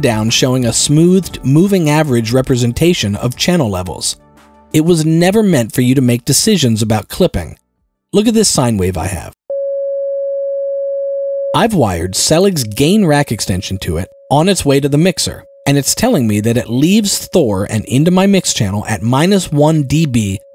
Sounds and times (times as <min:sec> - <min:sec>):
Speech: 0:00.0 - 0:04.2, 0:04.8 - 0:07.6, 0:08.2 - 0:09.4, 0:11.6 - 0:20.5.